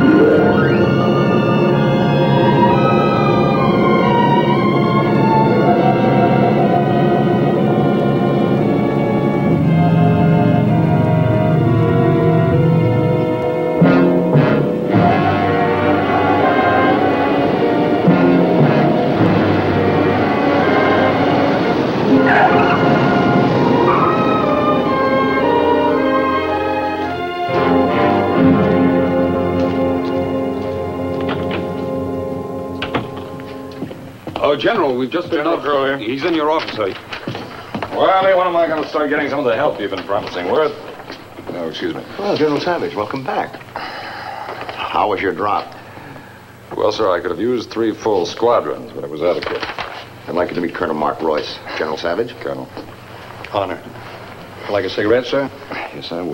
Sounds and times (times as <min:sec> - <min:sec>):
Music: 0:00.0 - 0:43.1
Speech: 0:34.4 - 0:37.0, 0:37.9 - 0:40.8, 0:41.5 - 0:43.6, 0:44.8 - 0:45.7, 0:46.7 - 0:49.6, 0:50.3 - 0:52.8, 0:54.6 - 0:56.3.